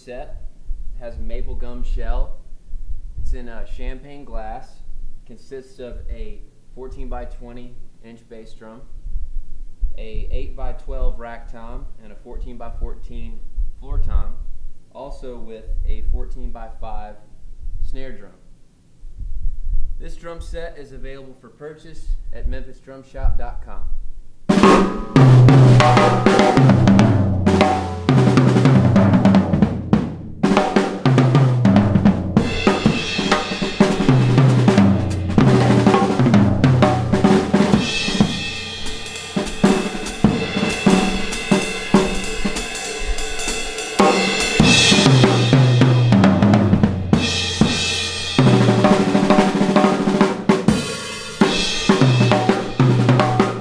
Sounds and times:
Bass drum: 24.5s - 53.6s
Drum kit: 24.5s - 53.6s
Rimshot: 24.6s - 43.3s.

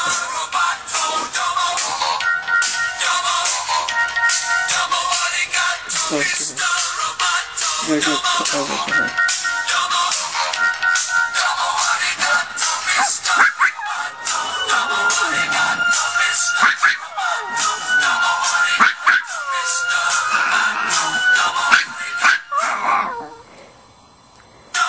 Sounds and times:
Singing: 0.0s - 23.4s
Dog: 16.5s - 23.5s.

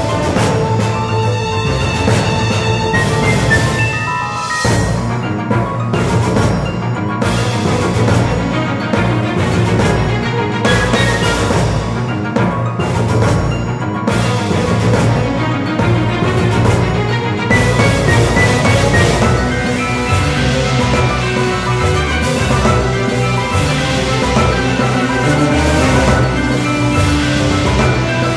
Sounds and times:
Music: 0.0s - 28.3s.

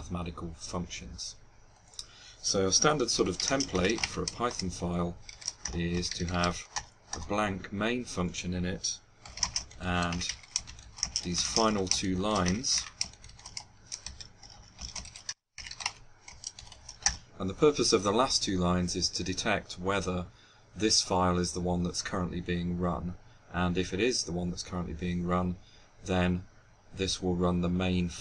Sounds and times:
Speech: 0.0s - 1.4s, 2.4s - 9.0s, 9.8s - 10.3s, 11.3s - 13.0s, 17.4s - 28.2s.

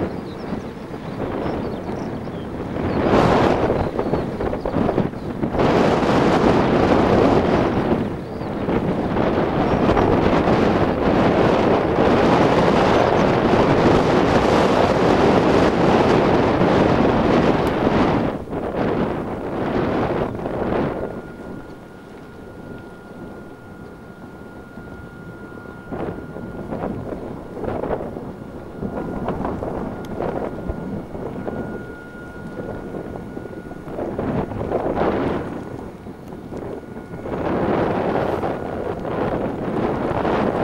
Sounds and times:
Outside, rural or natural: 0.0s - 40.6s.

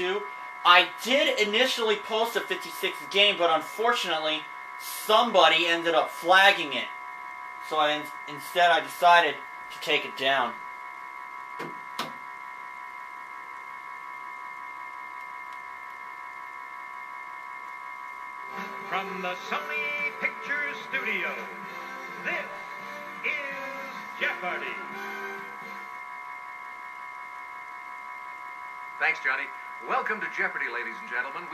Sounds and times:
Speech: 0.0s - 6.9s, 7.7s - 10.6s, 18.6s - 21.5s, 22.2s - 22.6s, 23.3s - 25.0s, 29.0s - 31.5s
Music: 18.5s - 25.9s.

